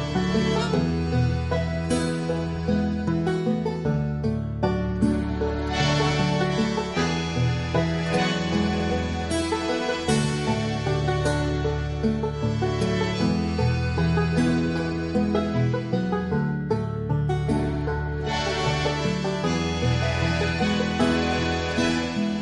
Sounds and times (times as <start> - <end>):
Music: 0.0 - 22.4.